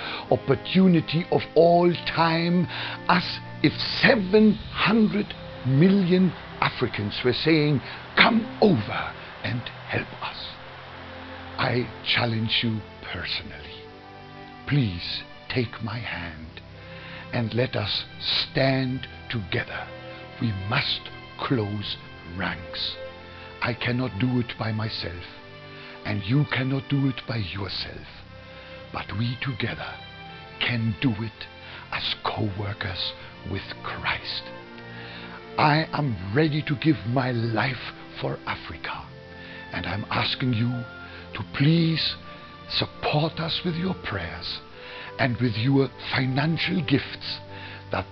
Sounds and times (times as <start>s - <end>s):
Music: 0.0s - 48.1s
Speech: 0.2s - 10.6s, 11.6s - 13.9s, 14.7s - 16.6s, 17.3s - 23.0s, 23.6s - 25.4s, 26.0s - 28.2s, 29.0s - 30.0s, 30.6s - 34.6s, 35.6s - 44.6s, 45.2s - 48.1s.